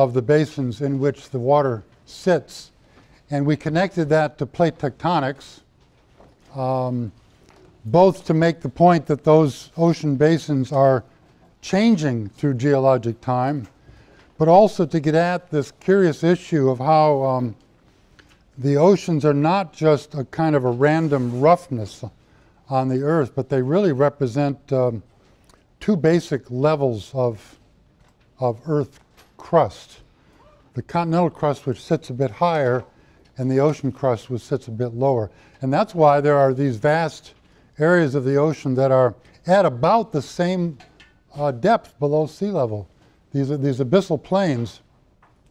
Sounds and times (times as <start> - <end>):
Speech: 0.0 - 5.7, 6.5 - 7.2, 7.8 - 13.7, 14.4 - 17.6, 18.6 - 25.1, 25.8 - 27.6, 28.4 - 30.1, 30.7 - 44.9.